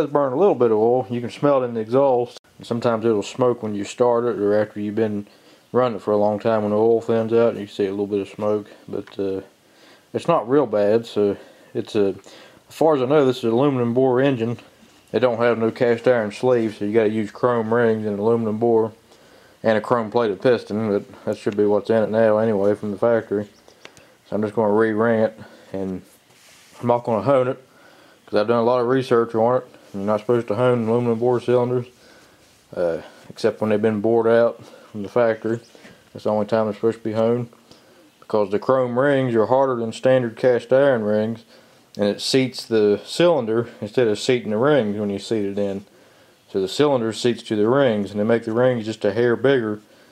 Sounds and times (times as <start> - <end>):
Speech: 0.0 - 19.0, 19.6 - 23.6, 24.3 - 26.2, 26.8 - 27.7, 28.3 - 32.0, 32.7 - 37.6, 38.2 - 45.9, 46.5 - 49.9.